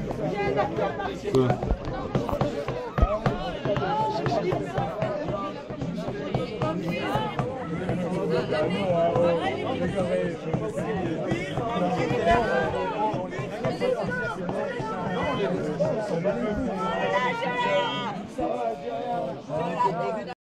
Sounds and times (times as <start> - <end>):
Speech: 0.0 - 20.4.